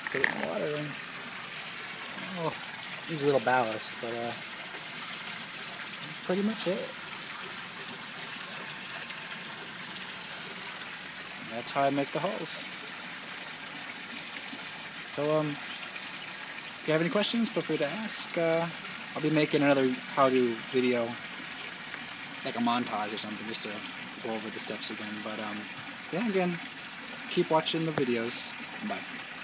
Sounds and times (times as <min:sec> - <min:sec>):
Speech: 0:00.0 - 0:01.0, 0:02.2 - 0:04.4, 0:06.1 - 0:06.9, 0:11.5 - 0:12.7, 0:15.1 - 0:15.6, 0:16.9 - 0:21.2, 0:22.5 - 0:26.6, 0:27.3 - 0:29.0.